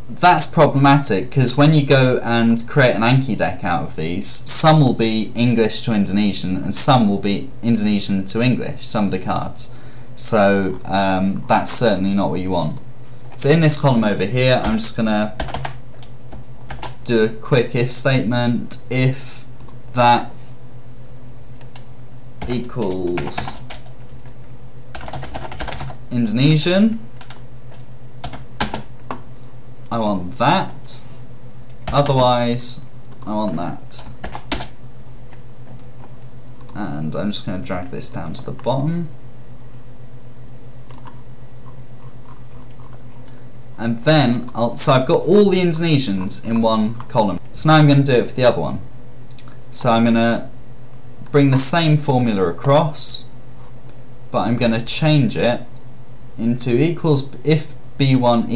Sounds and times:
Computer keyboard: 15.4s - 16.1s, 21.6s - 24.4s, 25.0s - 26.0s, 27.2s - 29.3s, 34.0s - 34.7s, 40.9s - 41.2s.

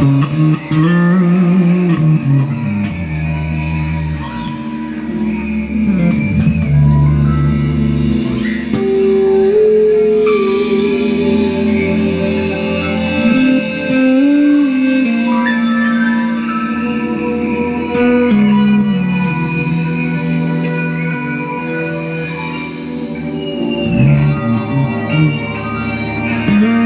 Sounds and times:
Music: 0.0s - 26.8s.

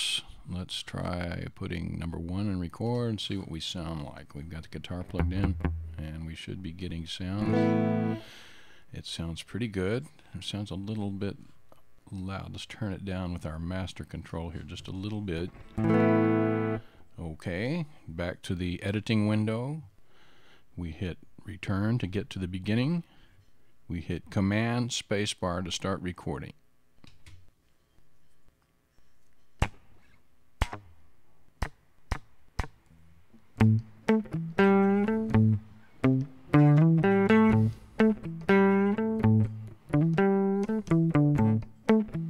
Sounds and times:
Speech: 0.0s - 7.6s, 8.9s - 15.6s, 17.2s - 19.9s, 20.8s - 23.1s, 23.9s - 26.6s
Music: 5.2s - 6.0s, 7.4s - 8.3s, 15.8s - 16.8s, 33.6s - 42.2s.

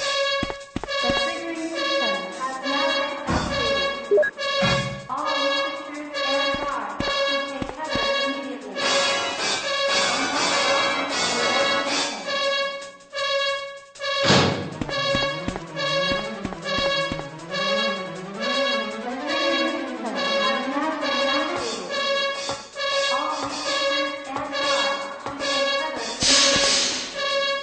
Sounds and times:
Music: 0.0s - 27.6s
Speech: 1.0s - 3.9s, 5.1s - 9.0s, 10.0s - 12.3s, 18.4s - 22.0s, 23.1s - 26.6s.

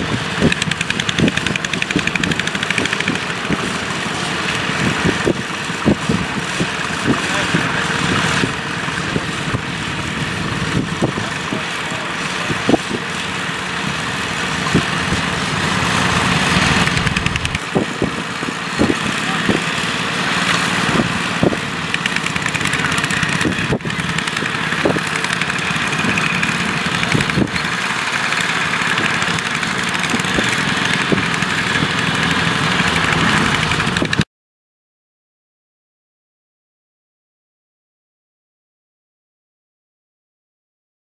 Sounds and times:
Idling: 0.0s - 34.2s
Outside, rural or natural: 0.0s - 34.3s
Vehicle: 0.0s - 34.3s
Speech: 7.0s - 8.2s, 11.1s - 12.8s, 19.0s - 19.8s.

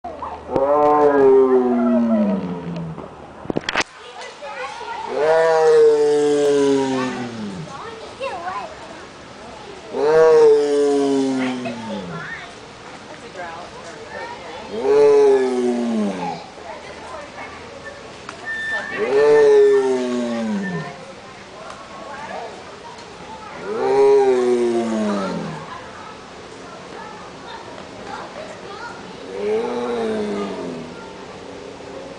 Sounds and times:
Roar: 0.5s - 3.0s, 5.1s - 7.8s, 9.9s - 12.4s, 14.6s - 16.5s, 18.5s - 21.1s, 23.6s - 25.8s, 29.2s - 31.2s.

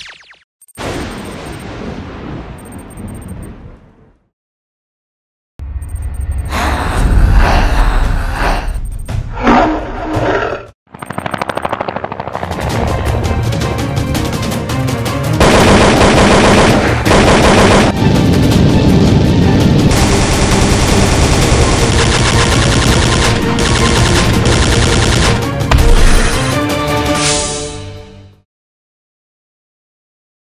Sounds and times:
Music: 12.4s - 28.4s.

